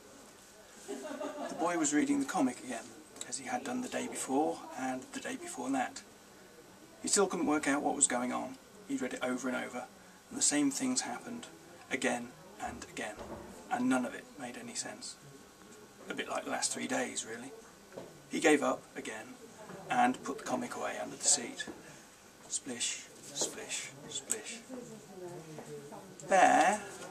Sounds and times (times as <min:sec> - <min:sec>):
Speech: 0:01.5 - 0:06.1, 0:06.8 - 0:21.8, 0:22.5 - 0:27.1.